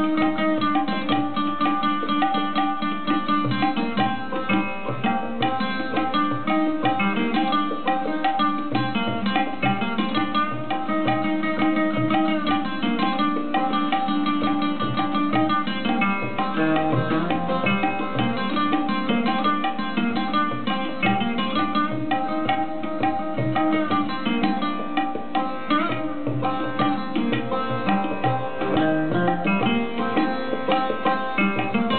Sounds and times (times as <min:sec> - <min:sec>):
Tabla: 0:00.0 - 0:31.9.